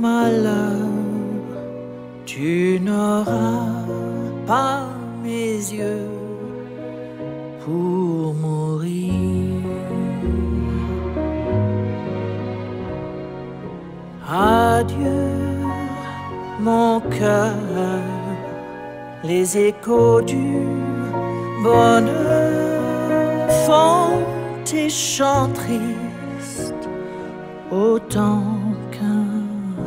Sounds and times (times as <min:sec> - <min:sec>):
Music: 0:00.0 - 0:29.8.